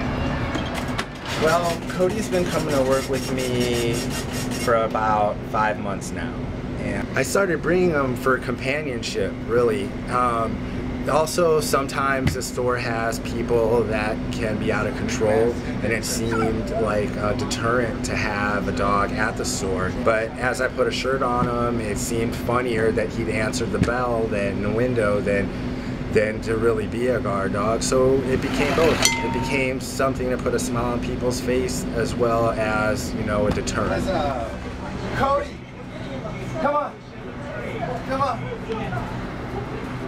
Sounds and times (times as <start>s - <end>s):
Speech: 1.4s - 39.9s.